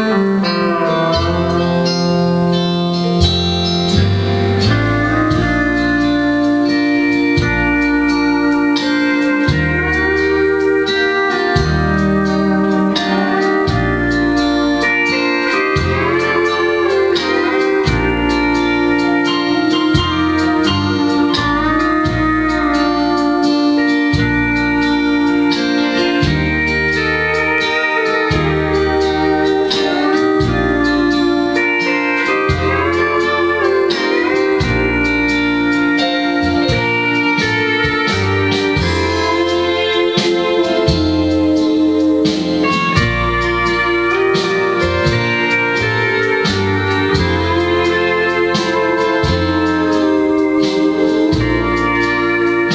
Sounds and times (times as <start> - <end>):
Steel guitar, slide guitar: 0.0 - 52.7.